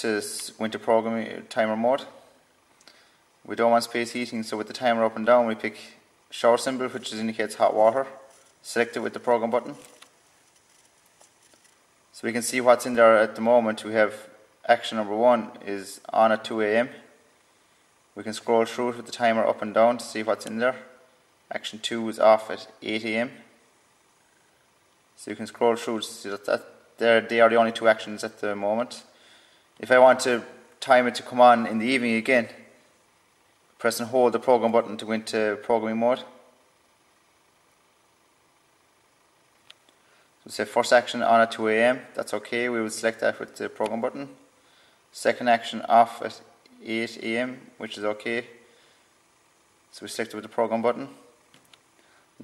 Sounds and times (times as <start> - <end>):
Speech: 0.0 - 2.2, 3.5 - 10.0, 12.2 - 17.1, 18.2 - 20.9, 21.5 - 23.5, 25.2 - 29.1, 29.8 - 32.7, 33.8 - 36.4, 40.5 - 44.4, 45.2 - 48.6, 49.9 - 51.3.